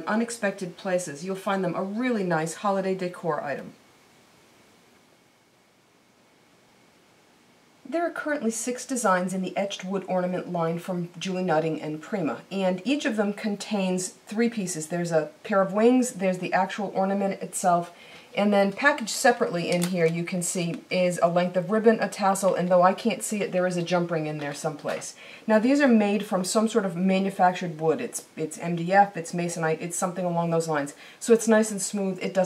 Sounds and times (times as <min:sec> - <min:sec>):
Speech: 0:00.0 - 0:03.8, 0:07.9 - 0:32.4.